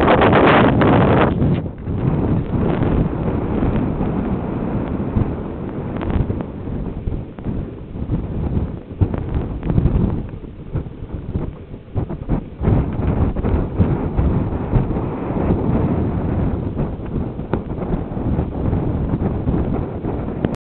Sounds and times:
Wind noise (microphone): 0.0 - 20.6.

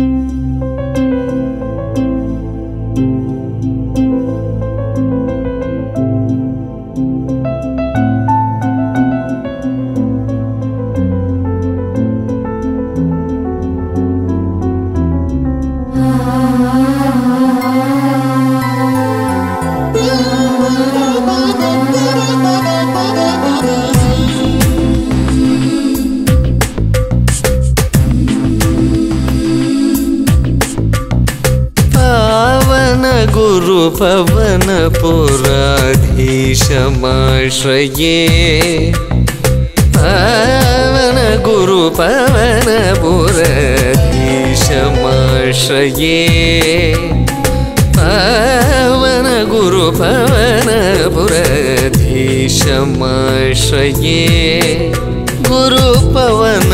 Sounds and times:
Carnatic music: 15.3 - 56.7.

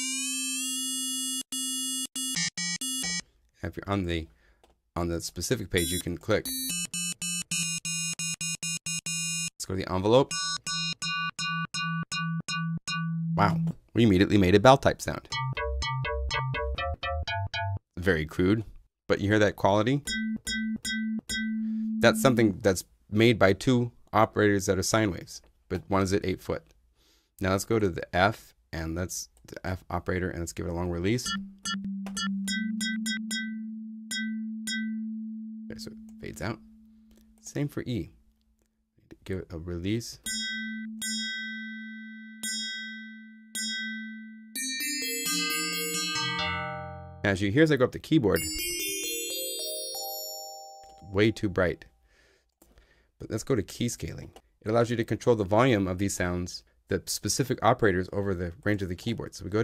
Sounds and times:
Speech: 3.6 - 4.3, 5.0 - 6.5, 9.6 - 10.3, 13.4 - 15.3, 18.0 - 20.1, 22.0 - 26.7, 27.4 - 31.3, 35.7 - 36.6, 37.4 - 38.2, 39.1 - 40.3, 47.3 - 48.5, 51.0 - 51.9, 53.2 - 59.6.

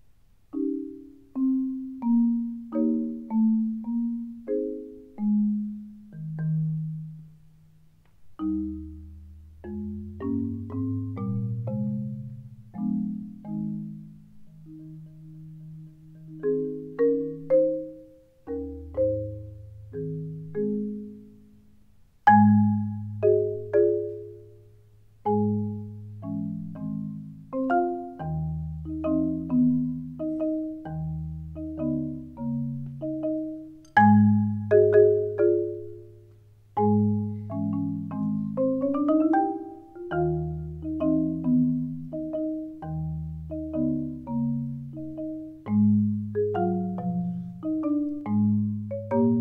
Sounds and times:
Percussion: 0.5 - 49.4.

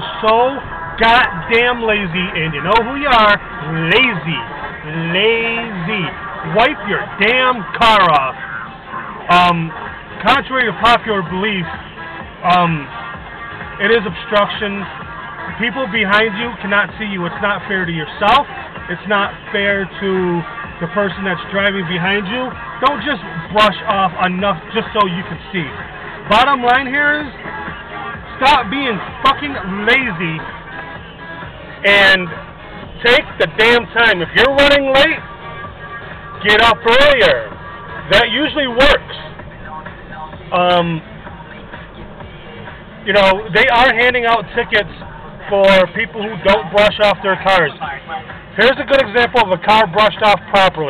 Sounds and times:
Speech: 0.0 - 8.4, 9.3 - 11.8, 12.4 - 13.0, 13.8 - 14.9, 15.5 - 27.3, 28.4 - 30.5, 31.8 - 32.4, 33.0 - 35.2, 36.4 - 37.5, 38.1 - 41.1, 43.0 - 48.0, 48.6 - 50.9
Music: 0.0 - 50.9.

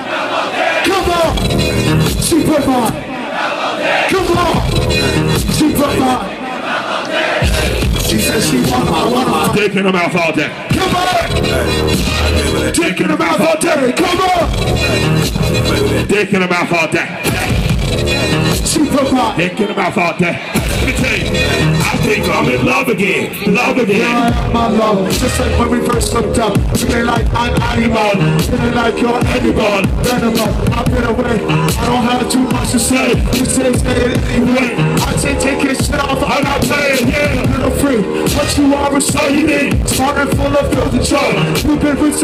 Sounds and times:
Music: 1.0 - 3.0, 4.2 - 6.2, 7.4 - 42.2.

